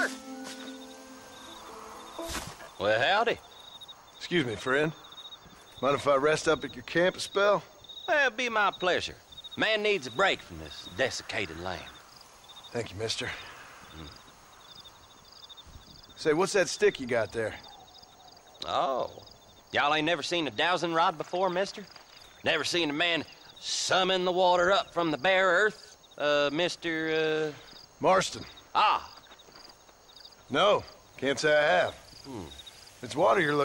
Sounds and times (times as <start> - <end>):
Speech: 30.5 - 33.6.